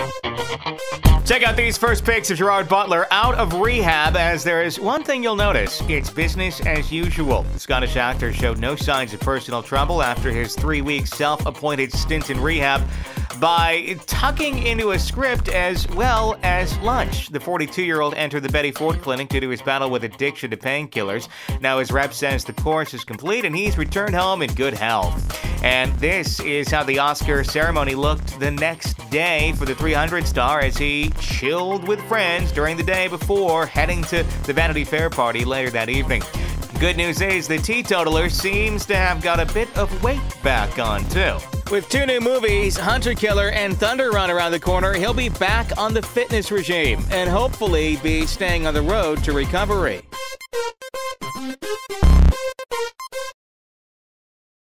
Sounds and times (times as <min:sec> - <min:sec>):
Music: 0:00.0 - 0:53.4
Speech: 0:01.2 - 0:50.0.